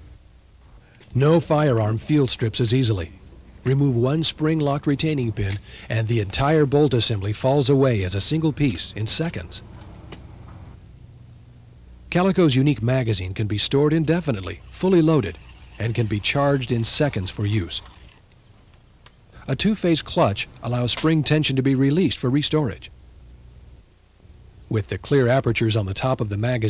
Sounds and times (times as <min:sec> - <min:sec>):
Speech: 0:01.1 - 0:09.6, 0:12.1 - 0:17.9, 0:19.4 - 0:22.9, 0:24.7 - 0:26.7.